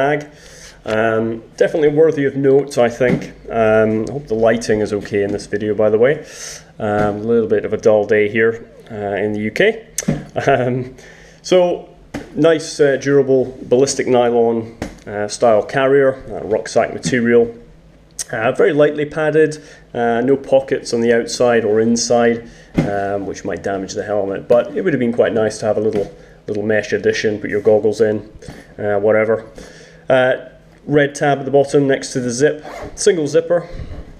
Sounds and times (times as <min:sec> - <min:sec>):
Speech: 0:00.0 - 0:17.6, 0:18.2 - 0:29.5, 0:30.1 - 0:33.8.